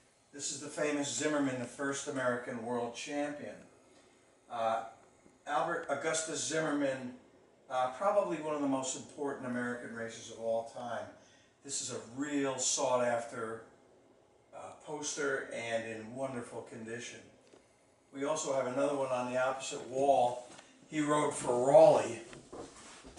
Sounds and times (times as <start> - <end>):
Speech: 0.4 - 3.7, 4.5 - 13.7, 14.6 - 17.4, 18.1 - 22.4.